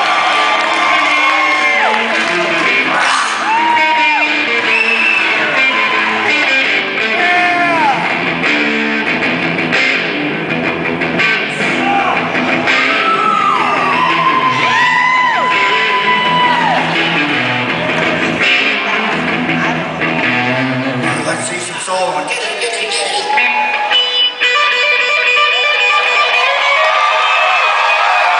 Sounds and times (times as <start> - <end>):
Electric guitar: 0.0 - 28.3
Speech: 21.2 - 23.4.